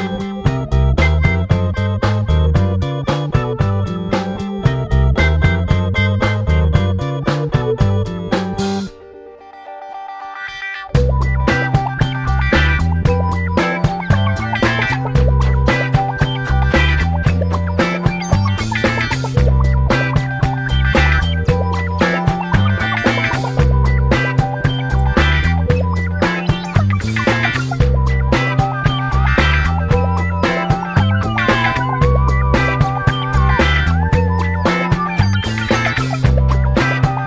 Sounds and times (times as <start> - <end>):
Music: 0.0 - 37.2.